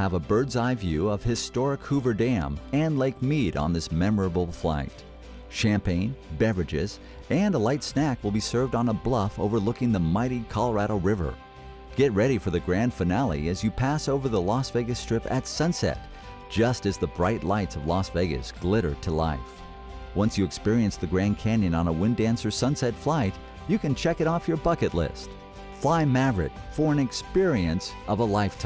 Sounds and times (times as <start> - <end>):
Speech: 0.0 - 11.4, 12.0 - 19.6, 20.2 - 28.6
Music: 0.0 - 28.6.